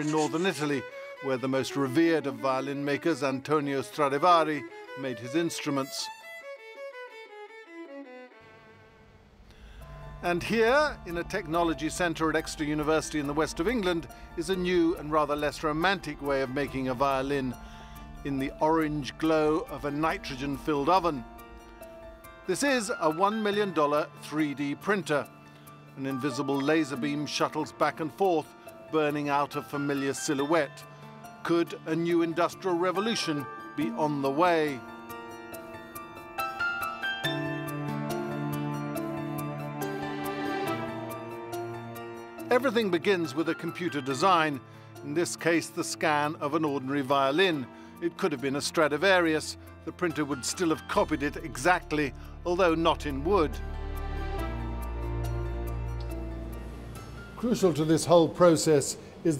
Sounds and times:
Speech: 0.0 - 6.2, 10.2 - 17.6, 18.2 - 21.2, 22.5 - 25.3, 26.0 - 30.8, 31.4 - 34.8, 42.5 - 53.6, 57.4 - 59.3.

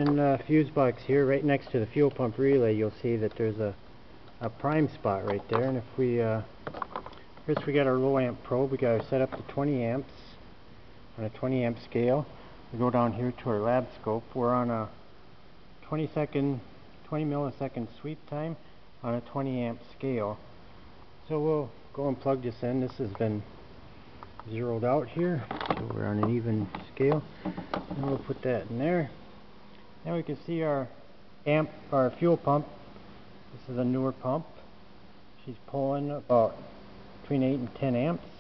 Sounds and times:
Speech: 0.0 - 3.8, 4.4 - 6.5, 7.5 - 10.4, 11.2 - 15.0, 15.8 - 20.5, 21.2 - 23.5, 24.4 - 27.3, 27.9 - 29.2, 30.0 - 32.8, 33.5 - 34.6, 35.4 - 38.3.

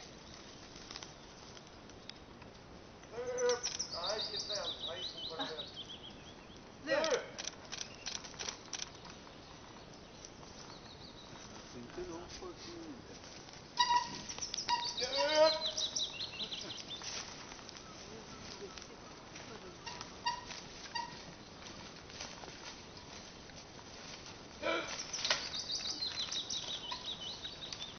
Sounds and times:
Bird: 3.1 - 7.1, 13.8 - 21.8, 24.6 - 27.9.

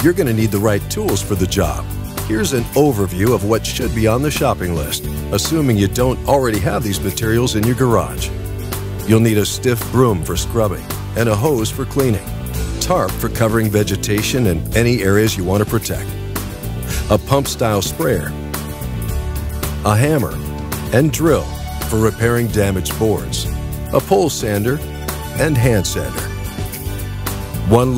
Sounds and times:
Speech: 0.0 - 8.3, 9.0 - 16.1, 17.0 - 18.4, 19.8 - 24.8, 25.4 - 26.3, 27.6 - 27.9
Music: 0.0 - 27.9.

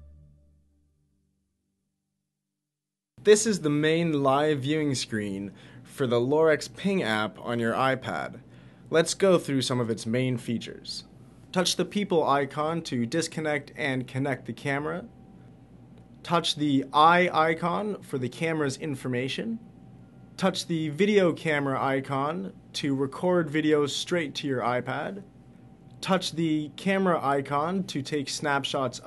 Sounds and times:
Speech: 3.2 - 15.1, 16.2 - 19.7, 20.4 - 25.3, 26.0 - 29.0.

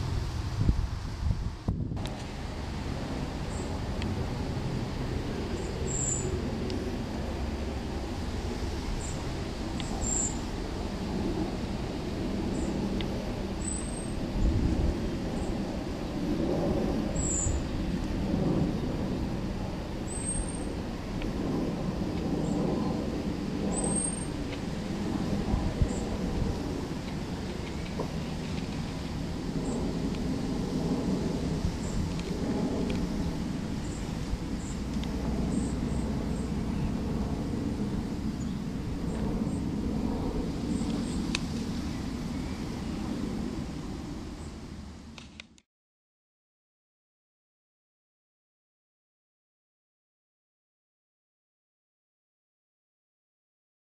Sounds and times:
Outside, rural or natural: 0.0 - 45.7.

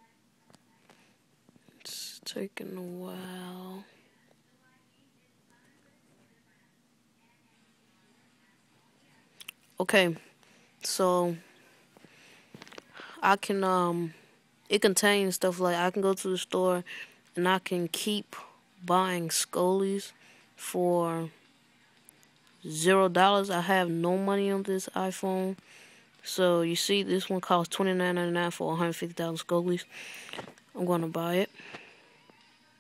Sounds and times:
Speech: 0.0 - 1.1, 1.7 - 11.6, 12.7 - 21.4, 22.6 - 25.6, 26.2 - 30.1, 30.7 - 31.9.

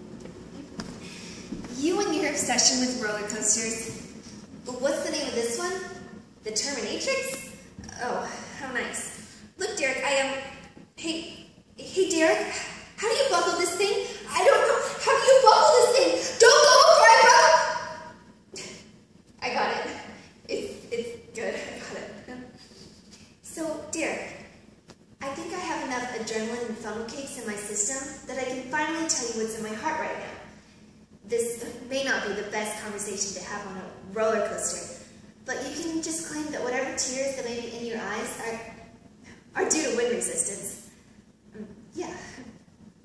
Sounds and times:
Speech: 1.7 - 17.9, 19.4 - 22.6, 23.4 - 24.5, 25.2 - 30.4, 31.3 - 38.8, 39.6 - 40.9, 41.6 - 42.5.

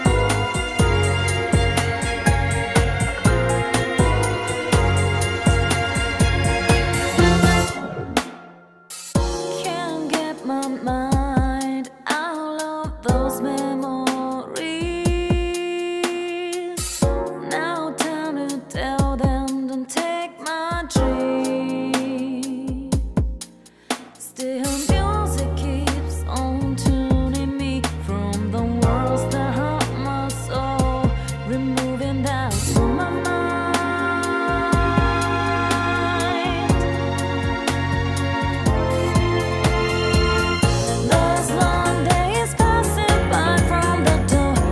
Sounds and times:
Music: 0.0 - 44.7.

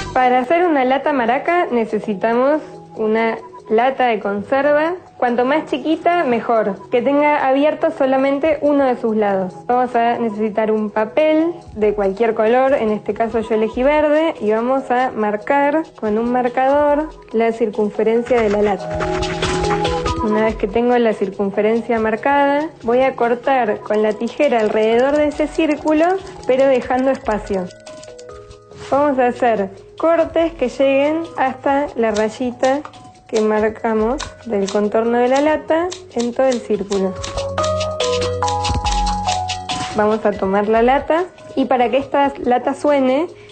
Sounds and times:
Music: 0.0 - 43.5
Speech: 0.2 - 18.8, 20.2 - 27.8, 28.9 - 37.2, 40.0 - 43.4.

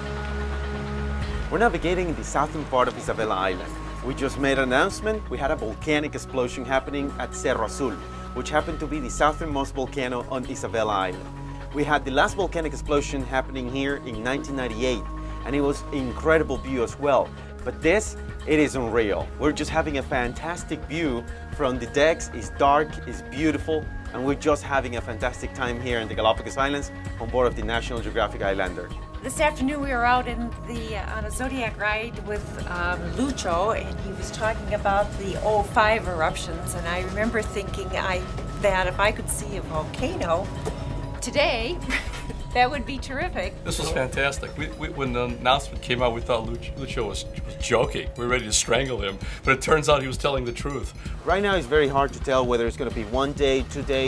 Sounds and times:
Music: 0.0 - 54.0.

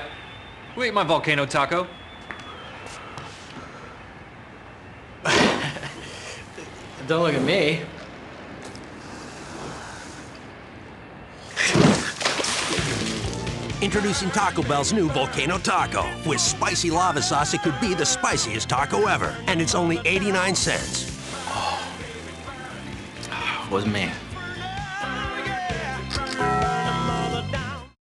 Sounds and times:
Music: 12.8 - 28.0
Speech: 13.8 - 20.9.

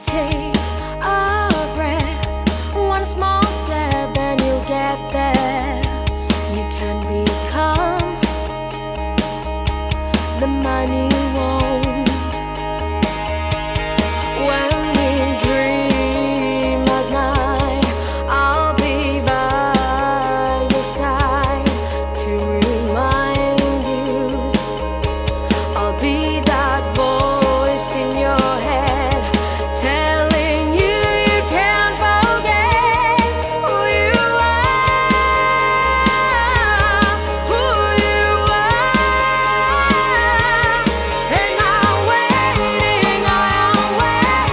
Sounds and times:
Music: 0.0 - 44.5.

